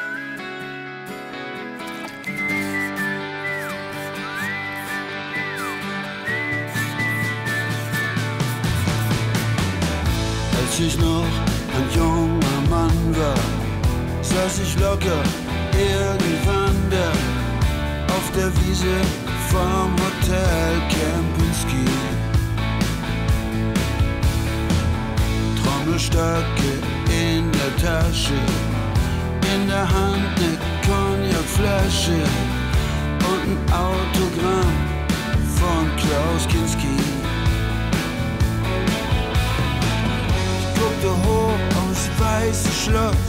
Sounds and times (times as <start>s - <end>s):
Music: 0.0s - 43.2s.